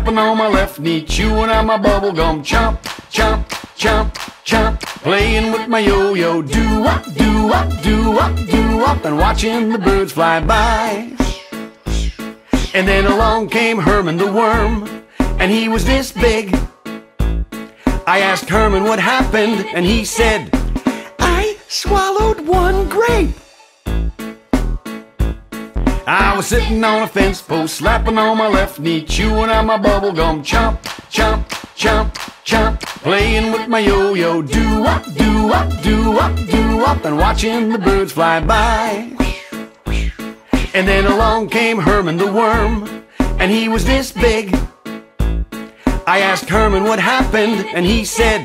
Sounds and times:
Music for children: 0.0 - 48.4.

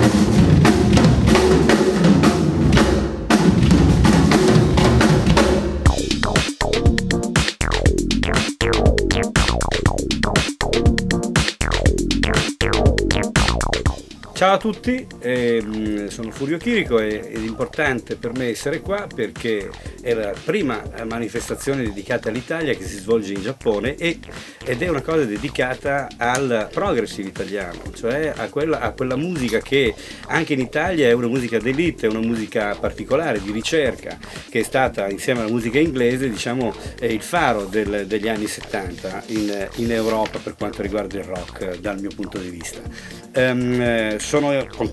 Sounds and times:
Music: 0.0 - 44.9
Speech: 14.4 - 44.9.

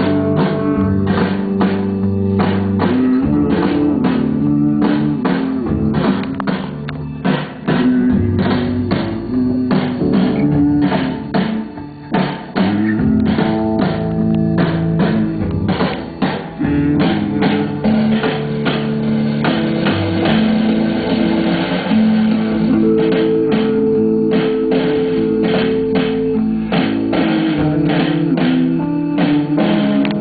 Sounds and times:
Electric guitar: 0.0 - 30.2
Strum: 0.0 - 30.2.

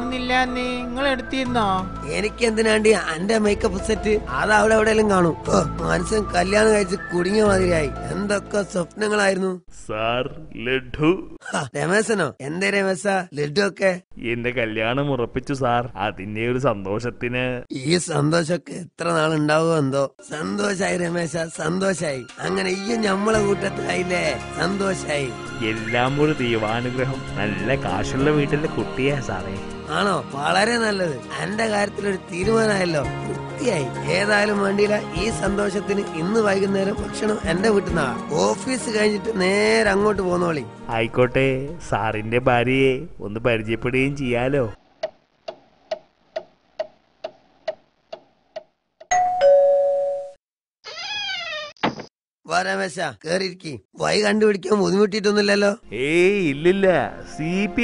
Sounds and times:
Speech: 1.4 - 44.8, 52.5 - 57.8.

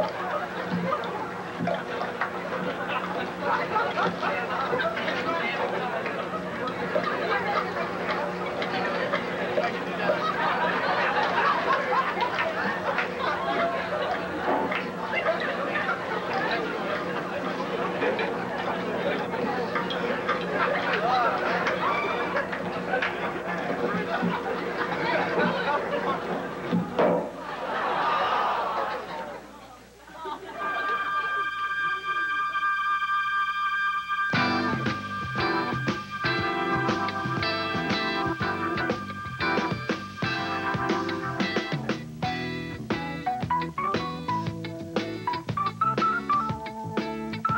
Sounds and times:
Speech: 3.2 - 10.3, 28.9 - 30.5.

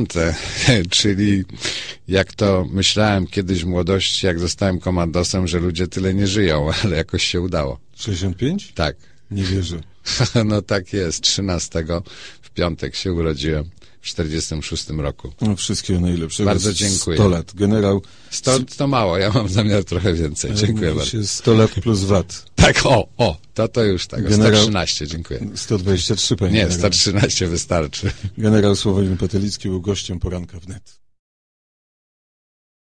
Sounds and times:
Speech: 0.0 - 31.0.

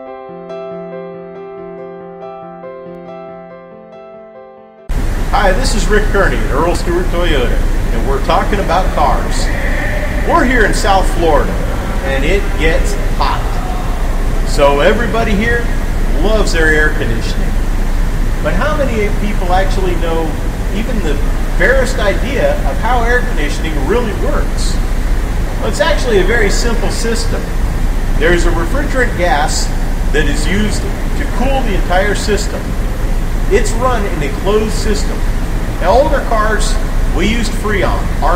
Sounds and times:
Air conditioning: 4.9 - 38.3
Speech: 5.4 - 17.6, 18.4 - 24.8, 25.6 - 27.5, 28.2 - 32.8, 33.5 - 35.2, 35.8 - 38.3.

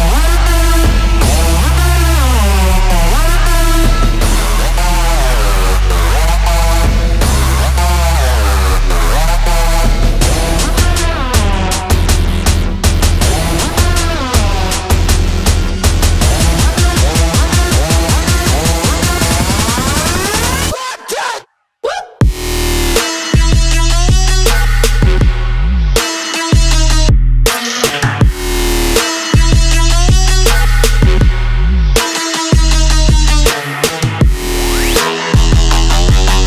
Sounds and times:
Electronic dance music: 0.0 - 21.5, 22.2 - 36.4.

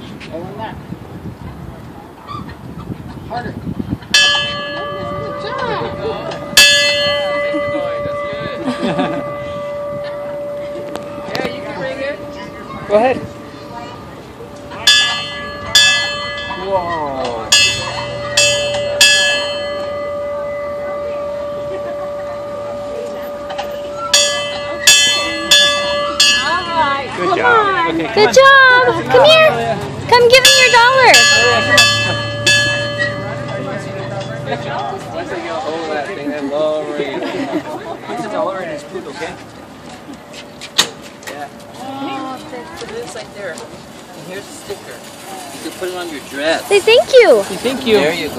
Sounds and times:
Vehicle: 0.0 - 48.3
Jingle bell: 30.4 - 34.4.

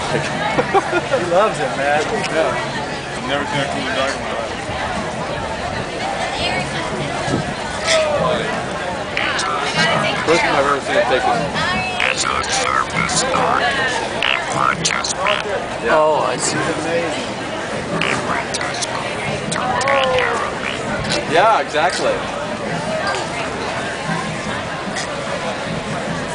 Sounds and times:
Speech: 0.0 - 26.3.

